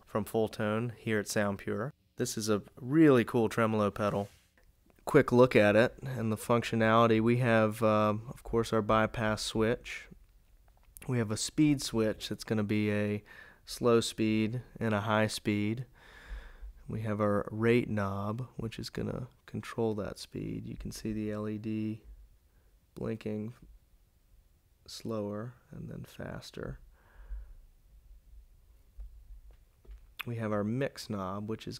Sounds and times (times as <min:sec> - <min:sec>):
Speech: 0:00.0 - 0:04.4, 0:05.0 - 0:10.2, 0:11.0 - 0:15.9, 0:16.9 - 0:22.1, 0:23.0 - 0:23.7, 0:24.9 - 0:26.8, 0:30.2 - 0:31.7.